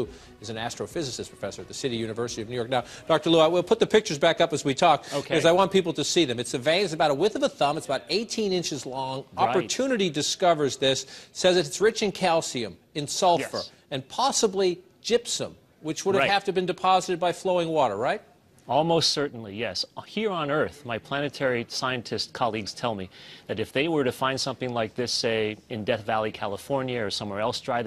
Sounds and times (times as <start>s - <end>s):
Speech: 0.0s - 27.8s.